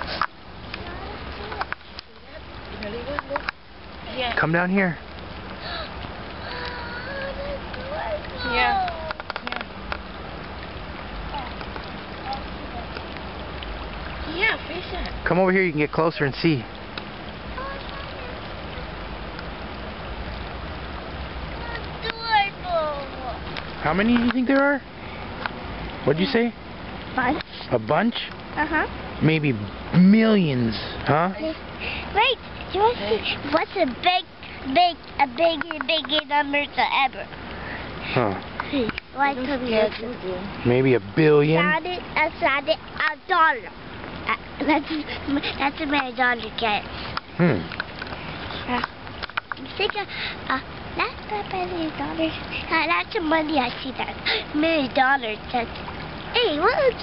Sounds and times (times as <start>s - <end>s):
Child speech, kid speaking: 0.7s - 3.5s, 4.1s - 4.4s, 6.4s - 9.6s, 11.3s - 11.6s, 12.2s - 13.1s, 14.2s - 15.2s, 17.5s - 19.0s, 21.5s - 23.5s, 27.2s - 27.4s, 28.6s - 28.9s, 31.4s - 37.4s, 38.7s - 40.5s, 41.5s - 46.9s, 48.5s - 48.9s, 49.6s - 57.0s.